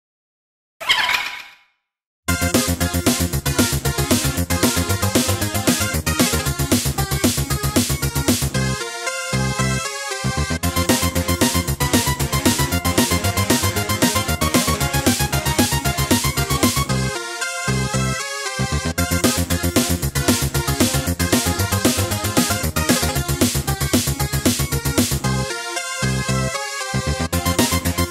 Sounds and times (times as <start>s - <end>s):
Music: 2.3s - 28.1s.